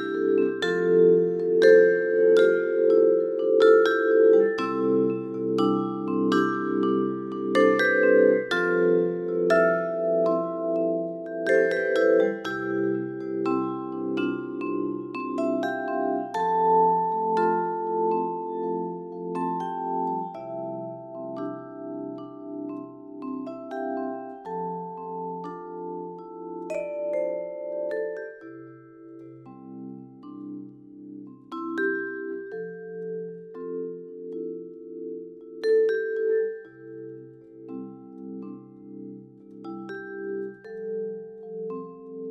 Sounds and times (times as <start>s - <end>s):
Glockenspiel: 0.0s - 42.3s
Marimba, xylophone: 0.0s - 42.3s.